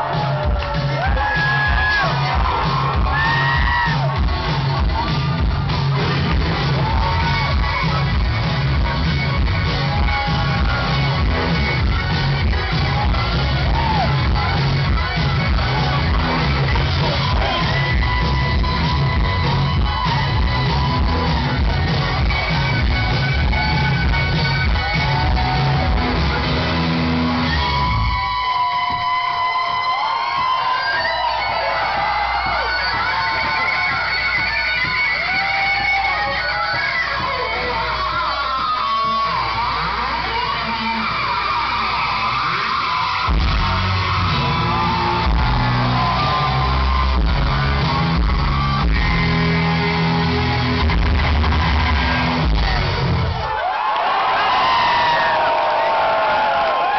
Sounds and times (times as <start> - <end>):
Electric guitar: 0.0 - 30.5, 31.1 - 53.6.